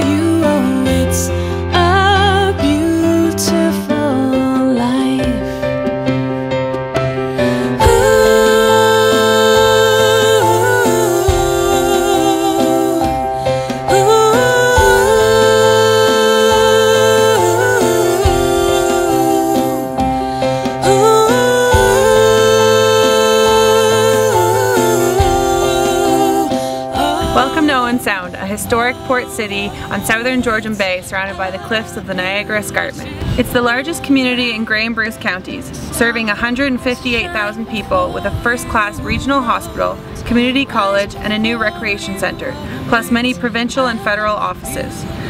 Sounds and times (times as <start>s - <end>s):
Music: 0.0s - 45.2s.